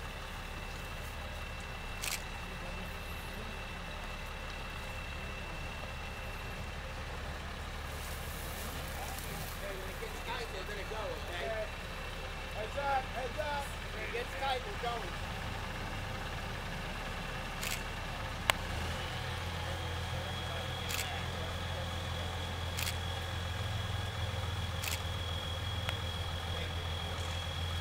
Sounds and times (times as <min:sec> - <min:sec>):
Speech: 0:08.7 - 0:11.8, 0:12.4 - 0:15.2, 0:19.7 - 0:22.7, 0:26.3 - 0:27.4.